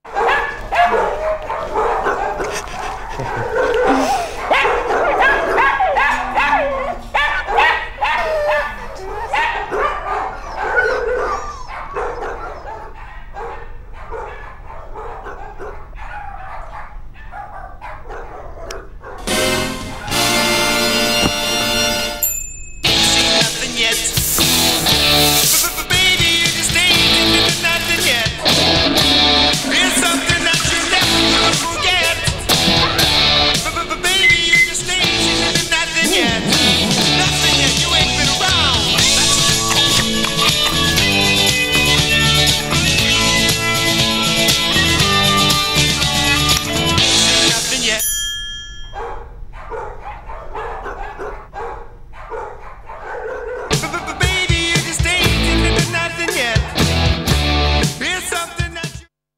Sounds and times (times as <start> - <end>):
Bow-wow: 0.1 - 19.3, 49.0 - 54.1.